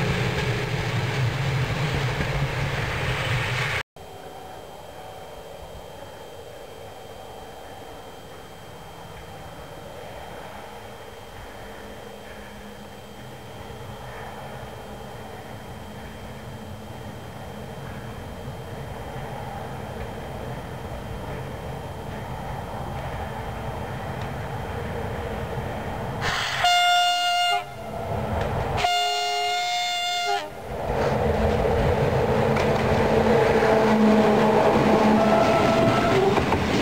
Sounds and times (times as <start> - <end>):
Train: 0.0 - 36.8.